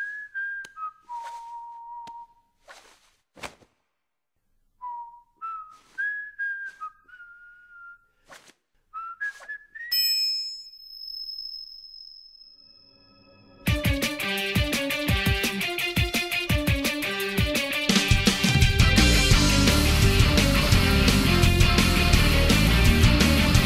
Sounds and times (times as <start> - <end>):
Music: 13.6 - 23.6.